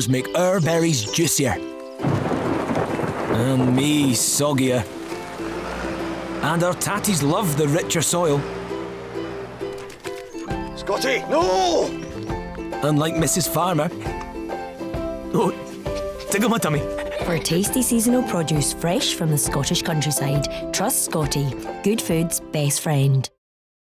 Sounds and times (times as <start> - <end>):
Music: 0.0 - 23.4
Speech: 3.4 - 4.8, 16.3 - 23.4.